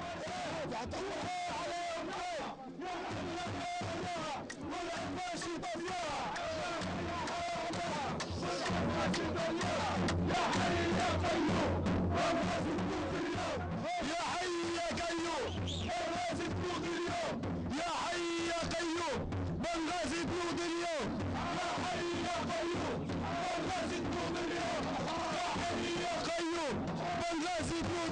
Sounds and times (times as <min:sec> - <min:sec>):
Music: 0:00.0 - 0:28.1.